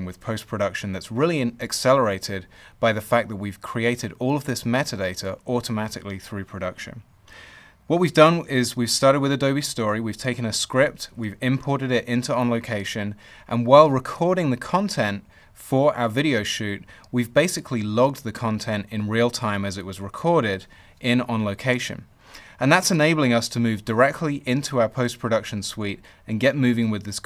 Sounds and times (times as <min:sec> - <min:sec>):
Male speech, man speaking: 0:00.0 - 0:07.0, 0:07.9 - 0:27.2.